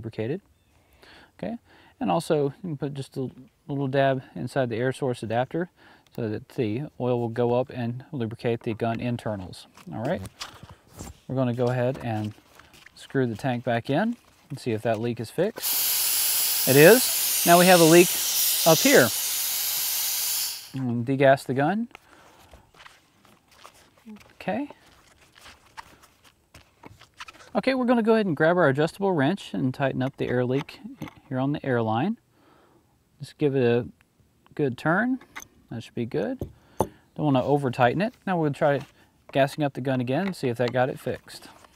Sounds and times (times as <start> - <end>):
Speech: 0.0 - 0.4, 1.4 - 10.3, 11.3 - 12.4, 13.0 - 15.6, 16.7 - 18.1, 18.7 - 19.1, 20.8 - 21.9, 24.1 - 24.8, 27.5 - 32.2, 33.2 - 33.9, 34.5 - 36.4, 37.2 - 41.6
Outside, rural or natural: 6.9 - 33.2.